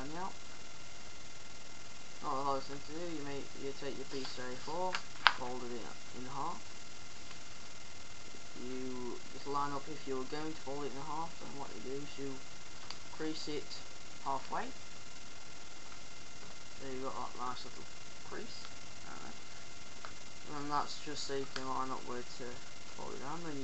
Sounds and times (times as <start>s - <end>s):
Speech: 0.0s - 0.4s, 2.2s - 6.6s, 8.6s - 12.4s, 13.2s - 14.8s, 16.8s - 19.4s, 20.5s - 23.6s.